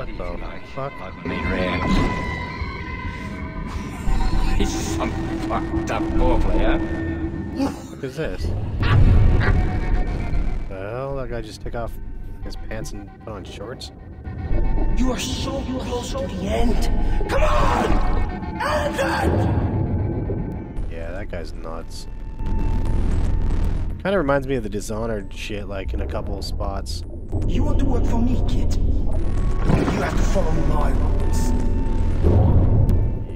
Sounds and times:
Music: 0:00.0 - 0:33.3
Speech: 0:10.7 - 0:13.9, 0:20.9 - 0:22.0, 0:24.0 - 0:28.8.

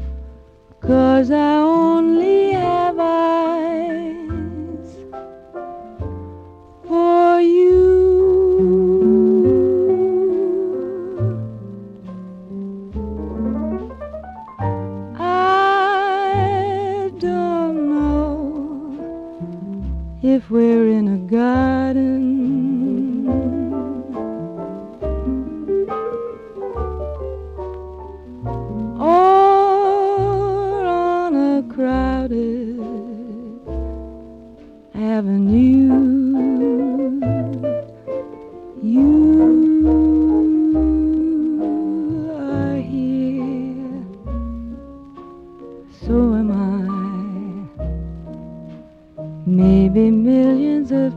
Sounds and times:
Keyboard (musical): 0:00.0 - 0:51.1.

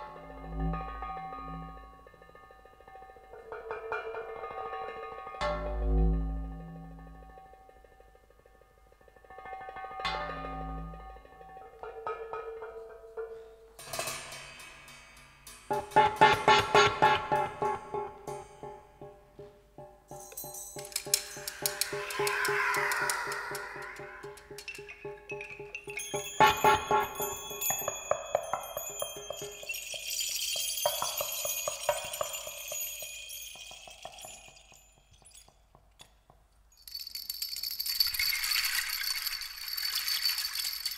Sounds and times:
Glockenspiel: 0:17.3 - 0:35.9, 0:36.8 - 0:40.9
Marimba, xylophone: 0:20.1 - 0:35.4.

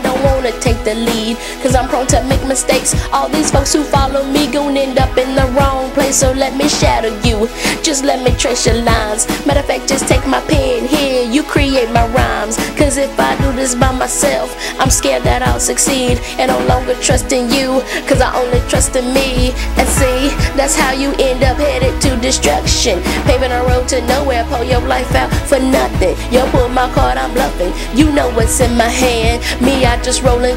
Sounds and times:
Female singing: 0:00.0 - 0:30.5
Music: 0:00.0 - 0:30.5.

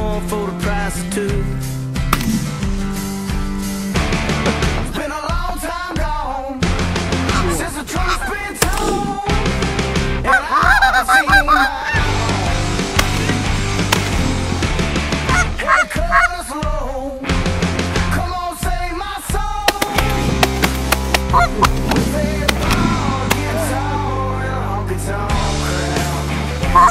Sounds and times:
Honk: 0:10.2 - 0:12.1, 0:15.3 - 0:16.4, 0:21.3 - 0:21.7, 0:26.7 - 0:26.9.

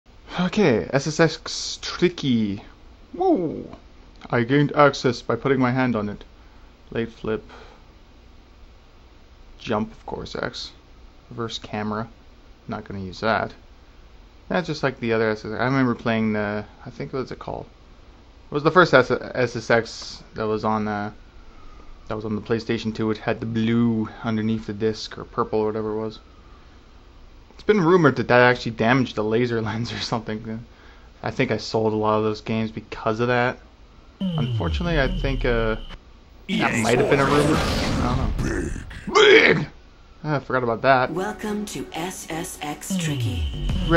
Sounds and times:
Inside, small room: 0:00.1 - 0:43.9
Speech: 0:00.3 - 0:06.3, 0:06.9 - 0:07.5, 0:09.6 - 0:12.1, 0:12.7 - 0:13.6, 0:14.5 - 0:17.7, 0:18.5 - 0:21.2, 0:22.1 - 0:26.2, 0:27.6 - 0:33.6, 0:34.2 - 0:35.8, 0:36.5 - 0:43.9.

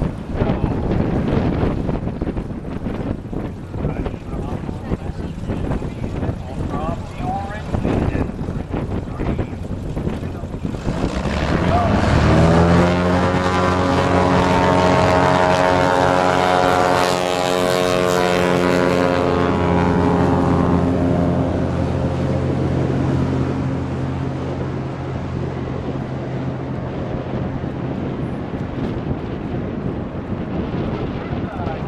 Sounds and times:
Aircraft: 0:00.0 - 0:31.8
Outside, rural or natural: 0:00.0 - 0:31.8.

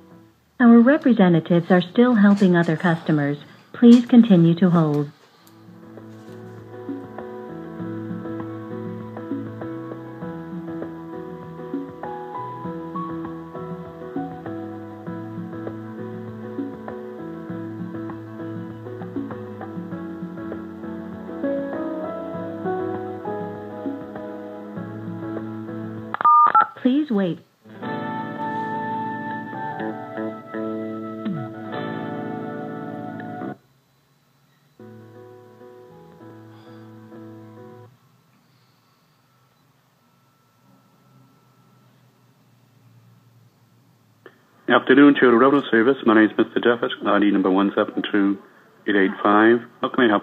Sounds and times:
Music: 0:00.0 - 0:01.0, 0:05.4 - 0:26.2, 0:27.6 - 0:33.6, 0:34.3 - 0:38.0, 0:38.6 - 0:43.0.

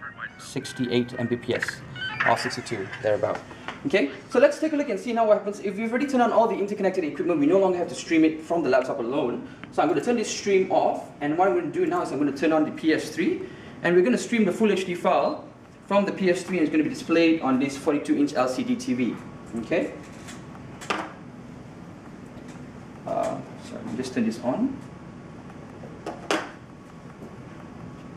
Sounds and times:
Speech: 0:00.0 - 0:20.0, 0:23.1 - 0:24.8.

